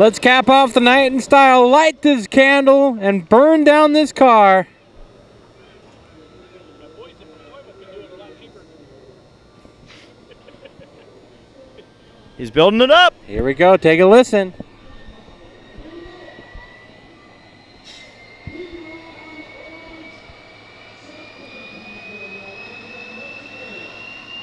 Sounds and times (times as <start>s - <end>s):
Aircraft: 0.0s - 24.4s
Speech: 12.4s - 14.6s, 18.5s - 20.2s.